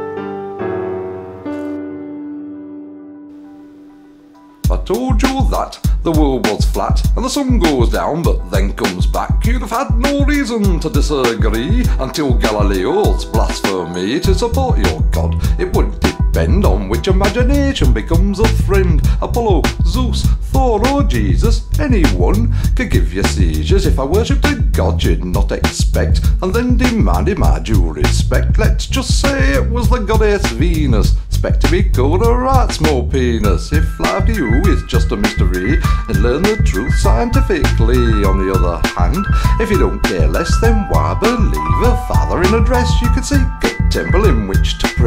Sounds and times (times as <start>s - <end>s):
Music: 0.0s - 45.0s.